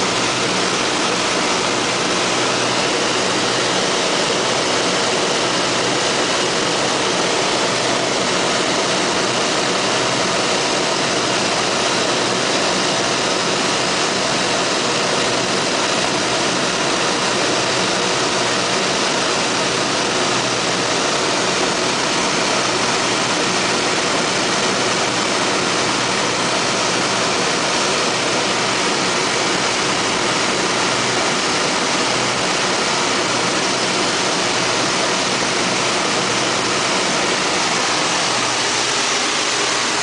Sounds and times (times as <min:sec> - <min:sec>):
Aircraft: 0:00.0 - 0:40.0
Outside, rural or natural: 0:00.0 - 0:40.0.